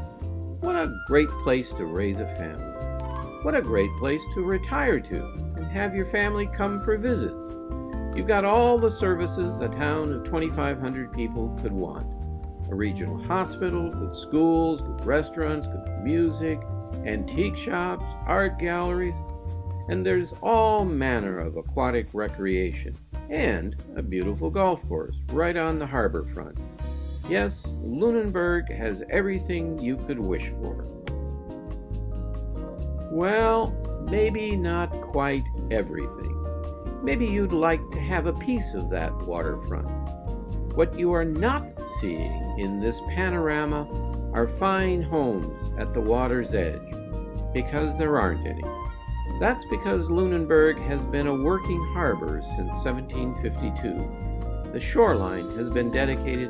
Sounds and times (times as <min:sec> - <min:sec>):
Music: 0:00.0 - 0:56.5
Speech: 0:00.6 - 0:02.7, 0:03.4 - 0:07.5, 0:08.2 - 0:12.0, 0:12.7 - 0:19.2, 0:19.9 - 0:26.6, 0:27.3 - 0:30.9, 0:33.1 - 0:36.4, 0:37.0 - 0:40.0, 0:40.8 - 0:46.9, 0:47.6 - 0:48.7, 0:49.4 - 0:54.1, 0:54.8 - 0:56.5.